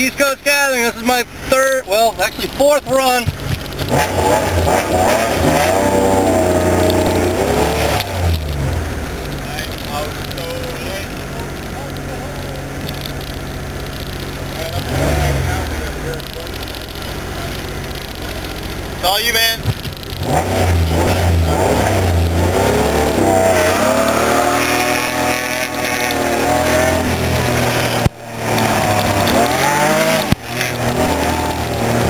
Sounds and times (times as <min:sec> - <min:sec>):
Speech: 0:00.0 - 0:03.3, 0:09.4 - 0:12.8, 0:14.5 - 0:16.7, 0:19.0 - 0:19.6
Outside, rural or natural: 0:00.0 - 0:32.0
Race car, auto racing: 0:00.0 - 0:32.0.